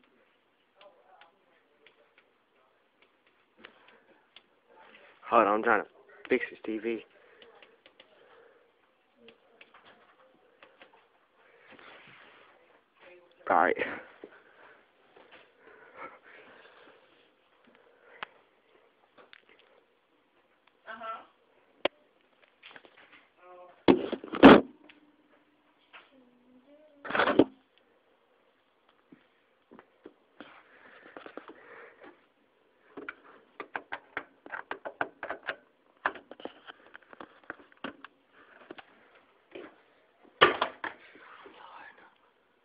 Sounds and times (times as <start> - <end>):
Inside, small room: 0.0 - 42.6.